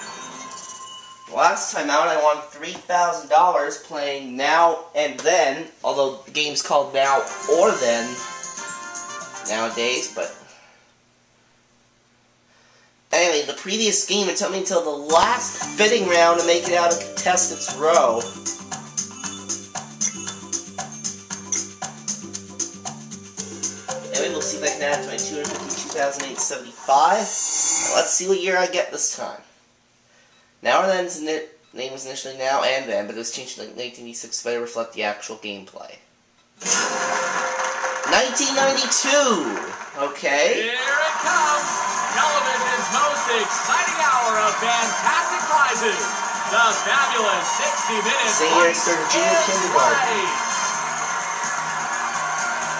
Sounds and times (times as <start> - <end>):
Speech: 1.3 - 8.2, 9.5 - 10.4, 13.1 - 18.3, 24.1 - 27.3, 27.9 - 29.5, 30.6 - 36.1, 38.1 - 50.4
Music: 7.1 - 10.5, 15.1 - 28.1, 36.6 - 39.9, 40.8 - 52.7.